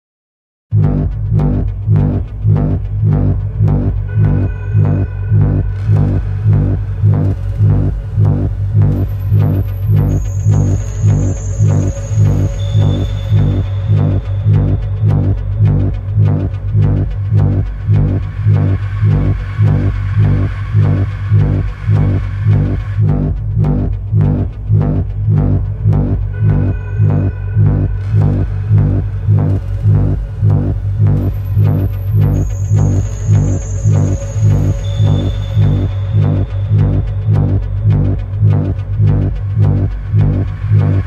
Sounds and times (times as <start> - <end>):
Soundtrack music: 0.7 - 41.0.